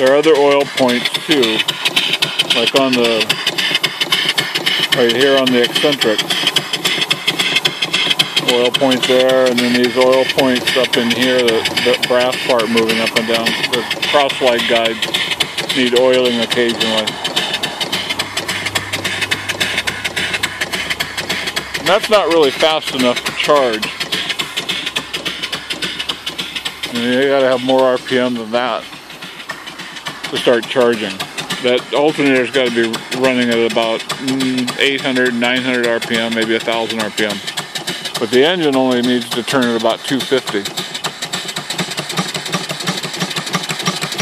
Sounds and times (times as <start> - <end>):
Speech: 0.0 - 1.6, 2.5 - 3.4, 5.0 - 6.3, 8.4 - 15.0, 15.7 - 17.1, 21.8 - 23.9, 26.9 - 28.9, 30.3 - 37.4, 38.2 - 40.7
Engine: 0.0 - 44.2.